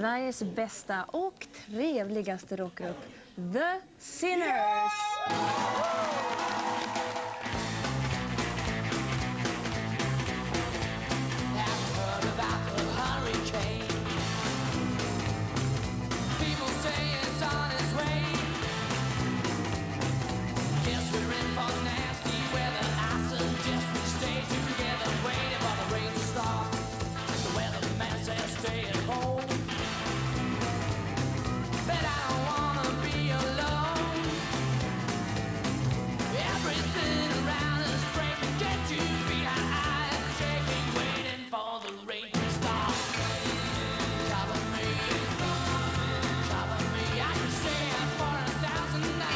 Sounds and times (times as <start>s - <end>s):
Music: 5.3s - 49.3s.